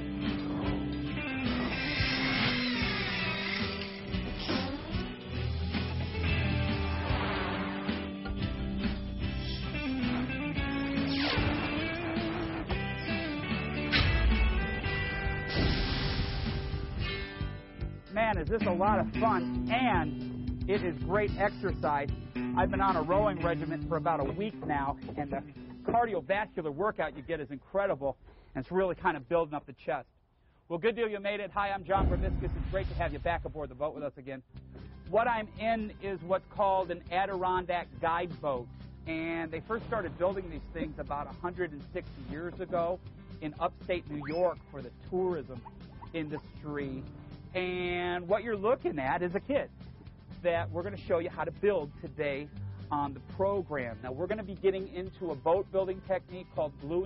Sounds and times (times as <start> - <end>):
Music: 0.0 - 27.5, 31.6 - 57.0.